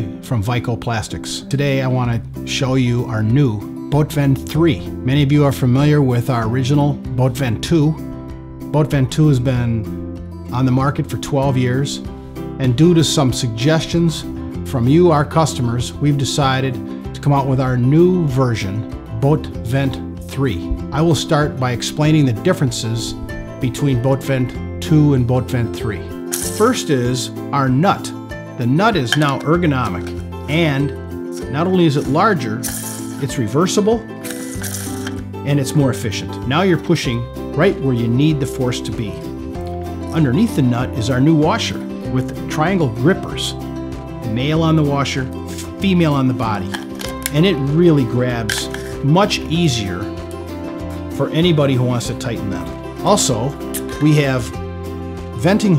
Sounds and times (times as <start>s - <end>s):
Speech: 0.0s - 8.0s, 8.7s - 9.9s, 10.5s - 32.6s, 33.2s - 34.0s, 35.4s - 39.2s, 40.1s - 43.6s, 44.2s - 50.1s, 51.2s - 54.6s, 55.4s - 55.7s
Music: 0.0s - 55.7s.